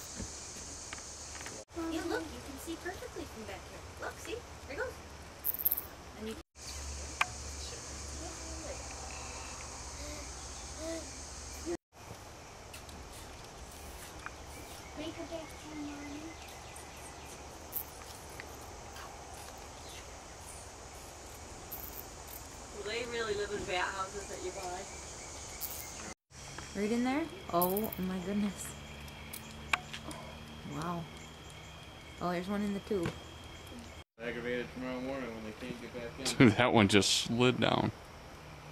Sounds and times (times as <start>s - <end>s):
Cricket: 0.0s - 1.6s, 4.3s - 38.7s.